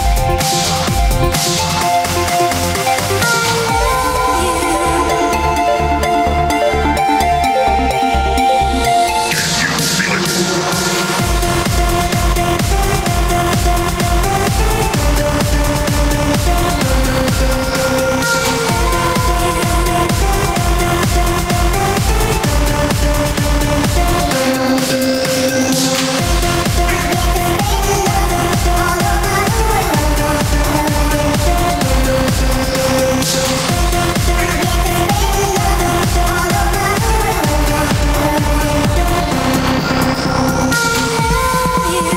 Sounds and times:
Electronic music: 0.0s - 42.1s.

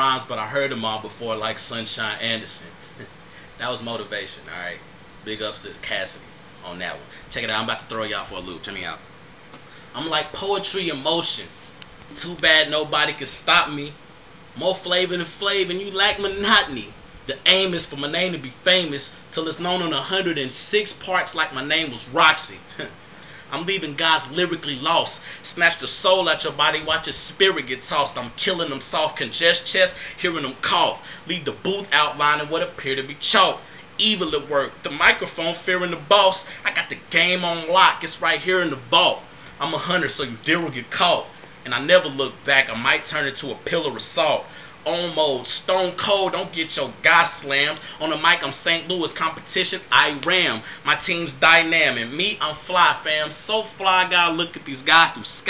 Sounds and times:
Speech: 0.0s - 9.1s, 9.9s - 11.5s, 12.1s - 14.0s, 14.6s - 55.5s.

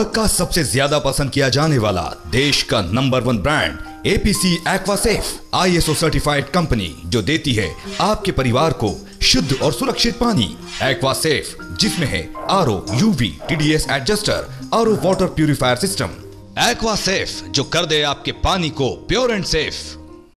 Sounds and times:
Speech: 0.0s - 20.0s
Music: 0.0s - 20.3s.

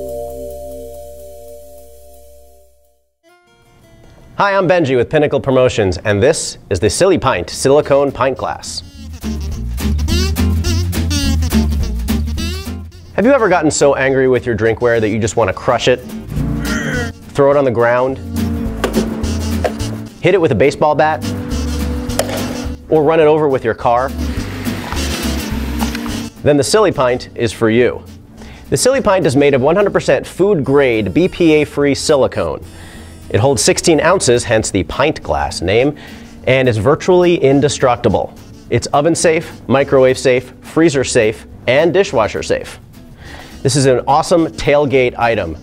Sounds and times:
Music: 0.0s - 5.1s, 7.2s - 45.6s
Speech: 4.4s - 8.9s, 13.2s - 16.0s, 17.4s - 18.2s, 20.2s - 21.2s, 22.9s - 24.1s, 26.4s - 28.1s, 28.7s - 32.6s, 33.3s - 42.8s, 43.6s - 45.6s.

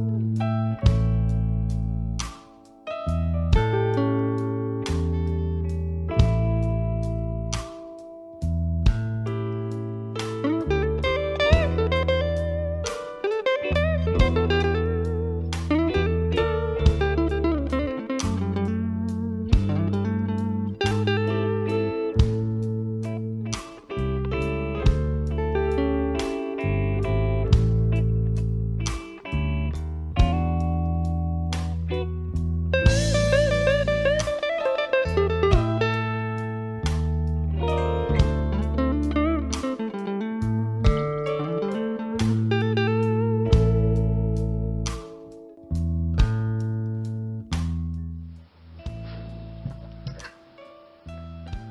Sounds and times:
Electric guitar: 0.0s - 51.7s.

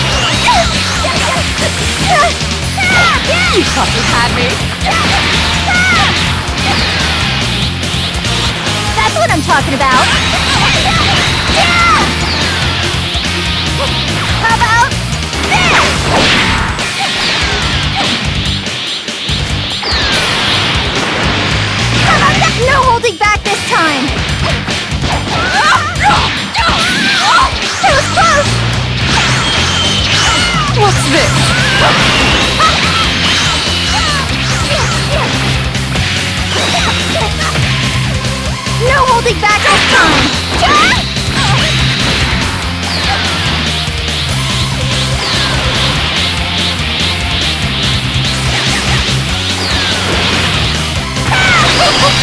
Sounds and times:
Music: 0.0s - 52.2s.

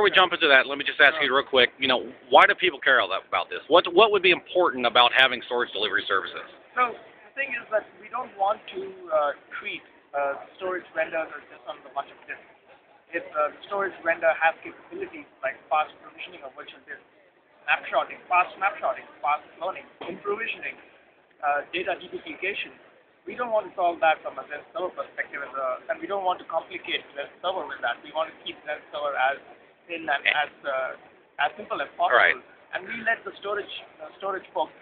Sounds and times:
Speech: 0.0s - 12.4s, 13.1s - 17.1s, 17.7s - 20.8s, 21.4s - 34.8s.

